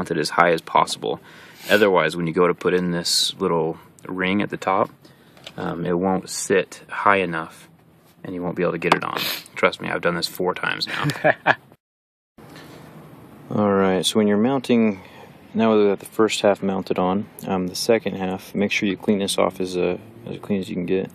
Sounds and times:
Speech: 0.0 - 4.9, 5.6 - 11.2, 13.5 - 21.1
Outside, urban or manmade: 0.0 - 11.8, 12.4 - 21.1.

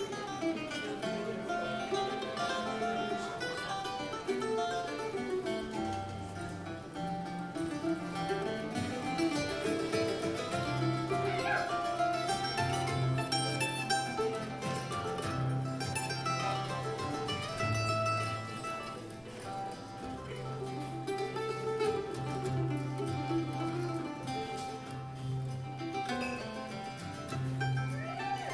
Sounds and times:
Banjo: 0.0 - 28.5.

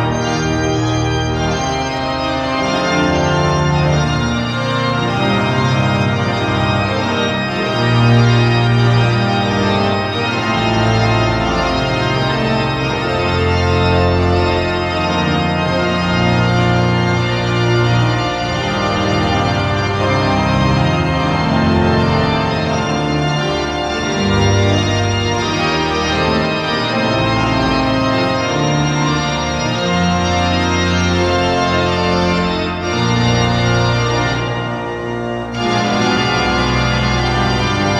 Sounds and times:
Classical music: 0.0 - 37.9.

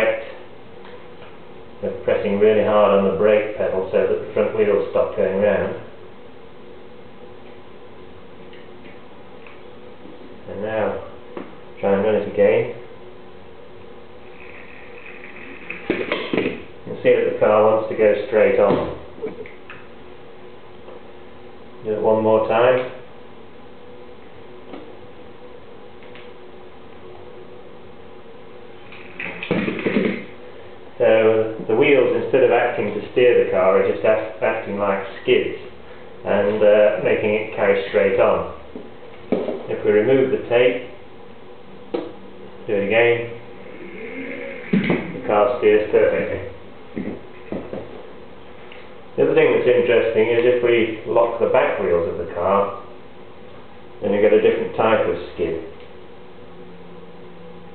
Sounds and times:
Speech: 0.0 - 0.4, 1.8 - 5.9, 10.4 - 11.2, 11.8 - 12.9, 16.9 - 19.4, 21.8 - 23.0, 31.0 - 38.6, 39.6 - 41.0, 42.7 - 43.4, 45.2 - 46.6, 49.2 - 52.9, 54.0 - 55.8.

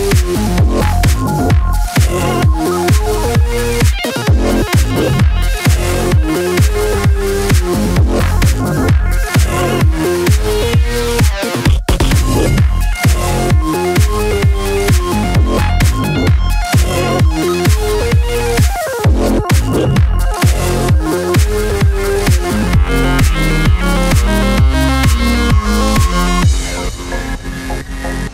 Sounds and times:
Dubstep: 0.0 - 28.3
House music: 0.0 - 28.3.

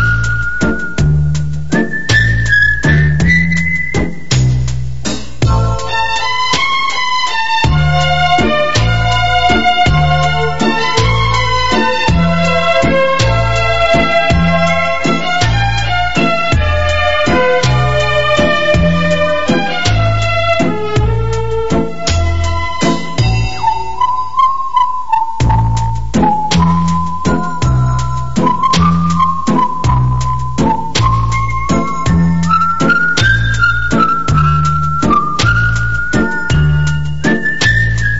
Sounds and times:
Music: 0.0 - 38.1.

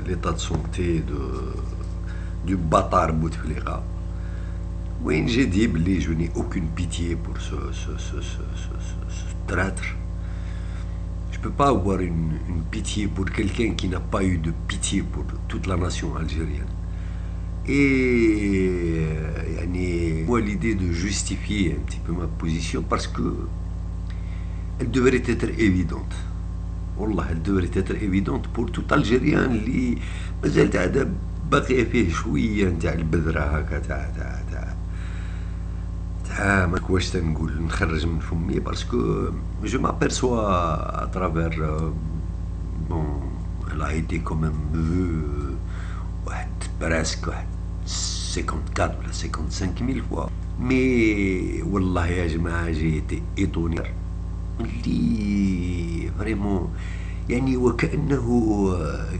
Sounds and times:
Speech: 0.0 - 3.9, 5.0 - 10.1, 11.3 - 16.8, 17.6 - 23.6, 24.8 - 26.4, 27.0 - 34.8, 36.2 - 54.0, 54.6 - 59.2.

